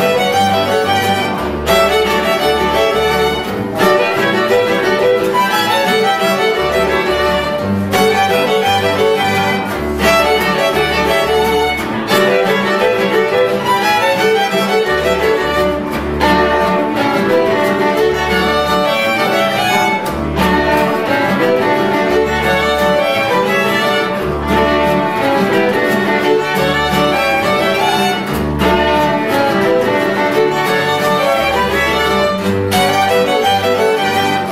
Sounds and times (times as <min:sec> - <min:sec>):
Pizzicato: 0:00.0 - 0:34.5.